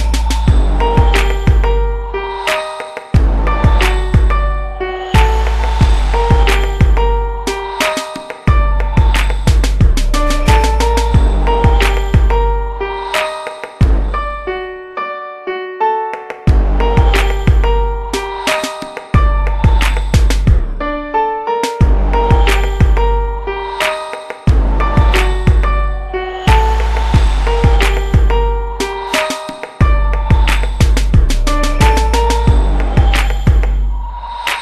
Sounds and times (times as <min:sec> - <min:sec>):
Music: 0:00.0 - 0:34.6.